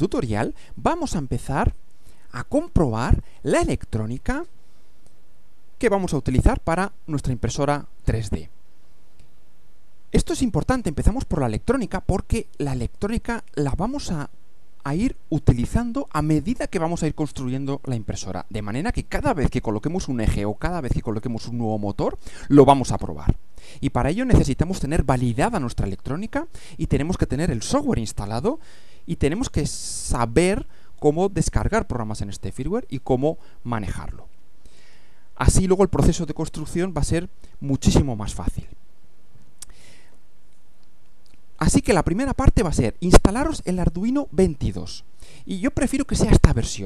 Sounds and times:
Speech: 0:00.0 - 0:04.5, 0:05.8 - 0:08.5, 0:10.2 - 0:34.3, 0:35.4 - 0:38.8, 0:41.6 - 0:46.8.

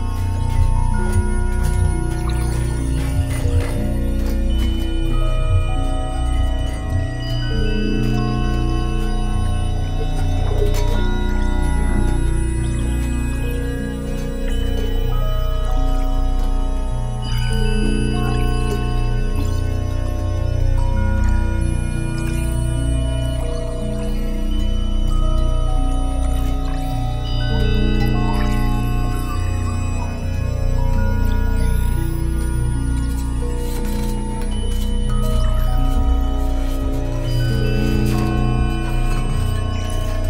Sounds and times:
Music: 0:00.0 - 0:40.2.

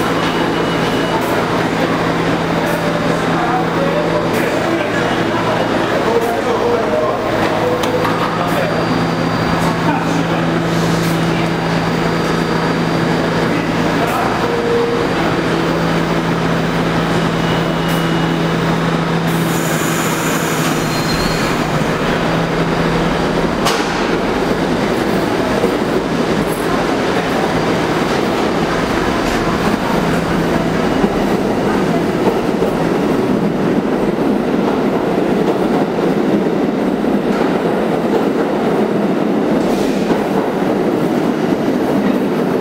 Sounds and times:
Railroad car, train wagon: 0:00.0 - 0:42.6
Subway, metro, underground: 0:00.0 - 0:42.6
Train: 0:00.0 - 0:42.6.

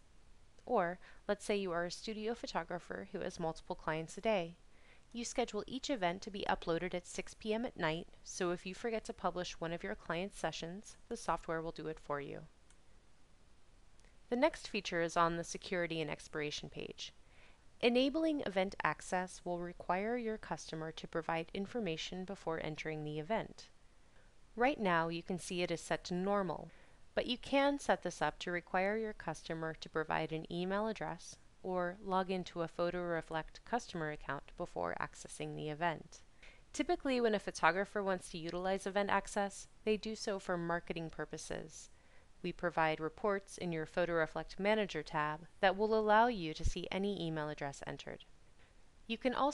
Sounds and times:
Speech: 0:00.6 - 0:04.6, 0:05.2 - 0:12.5, 0:14.3 - 0:17.2, 0:17.8 - 0:23.7, 0:24.6 - 0:48.3, 0:49.1 - 0:49.5.

